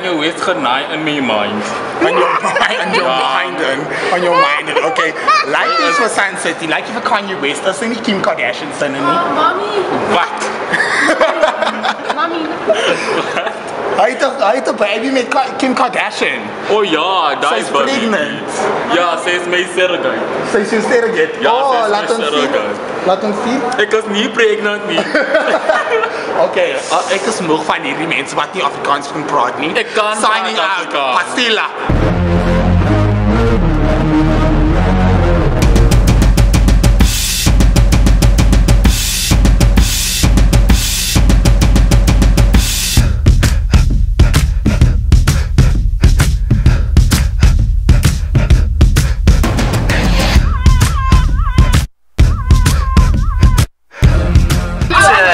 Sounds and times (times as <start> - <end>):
Bass drum: 31.9 - 55.1
Drum kit: 31.9 - 55.2
Drum roll: 35.3 - 55.1.